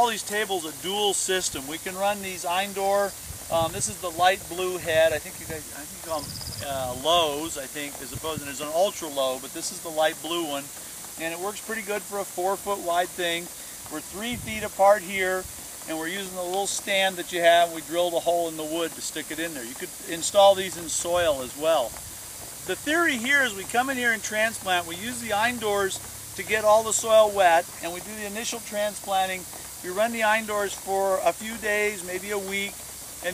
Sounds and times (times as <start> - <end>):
Speech: 0.0 - 21.9, 22.7 - 33.3.